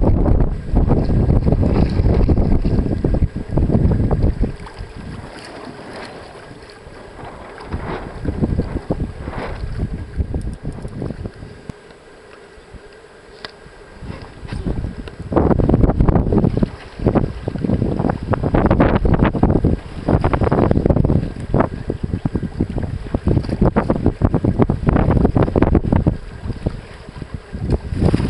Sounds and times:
Wind noise (microphone): 0.0 - 11.8, 14.0 - 28.3
Sailboat, sailing ship: 0.0 - 28.3.

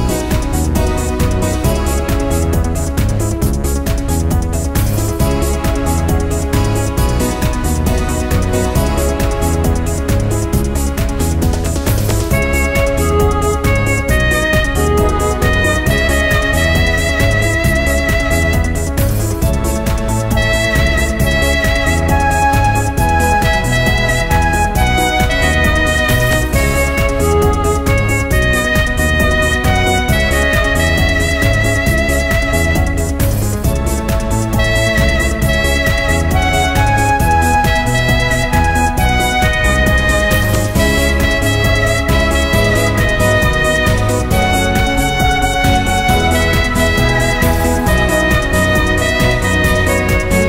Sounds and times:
Techno: 0.0 - 50.4.

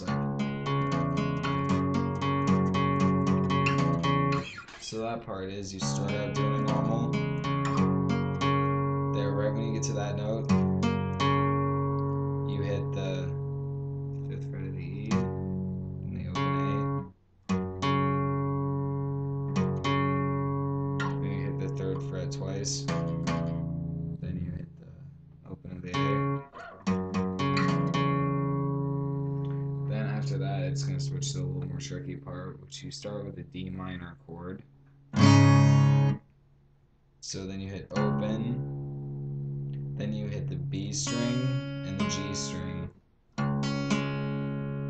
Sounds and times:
Guitar: 0.0 - 36.3, 37.2 - 44.8
Speech: 4.7 - 7.2, 9.2 - 10.5, 12.5 - 13.4, 14.2 - 15.2, 16.0 - 17.0, 21.2 - 22.9, 24.2 - 26.4, 29.9 - 34.6, 37.2 - 38.6, 40.0 - 43.0.

